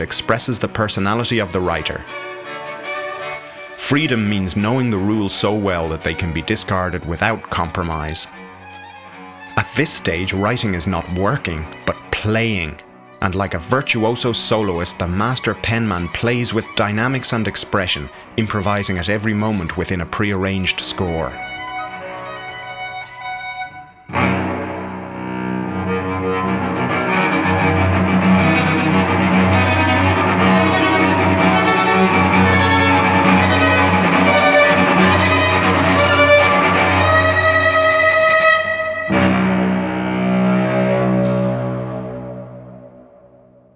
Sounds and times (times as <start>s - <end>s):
Double bass: 0.0s - 2.1s, 3.8s - 21.7s, 24.0s - 43.6s
Cello: 0.0s - 43.4s.